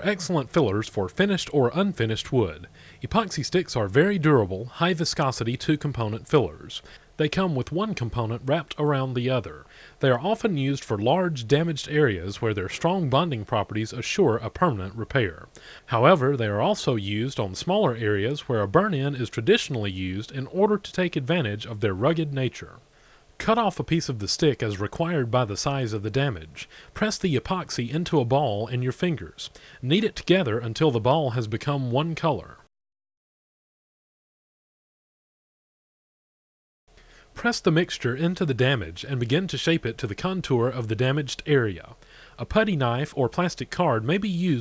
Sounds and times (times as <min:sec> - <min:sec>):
Speech: 0:00.0 - 0:22.8, 0:23.4 - 0:32.7, 0:37.4 - 0:44.6.